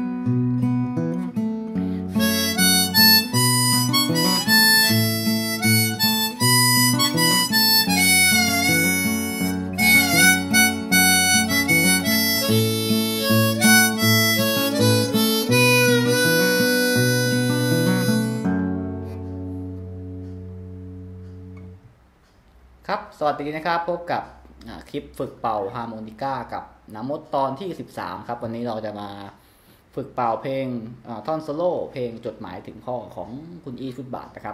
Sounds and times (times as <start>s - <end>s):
Harmonica: 1.8s - 19.2s.